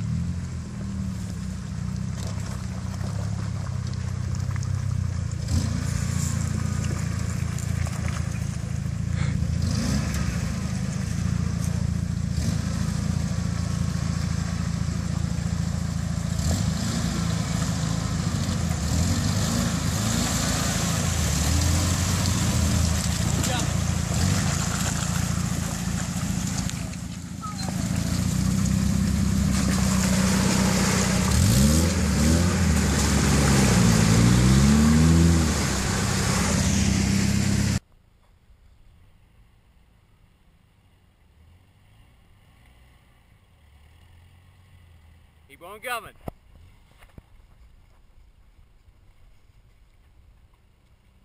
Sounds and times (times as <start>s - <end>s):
Truck: 0.0s - 51.2s
Speech: 23.4s - 23.8s, 45.5s - 46.2s.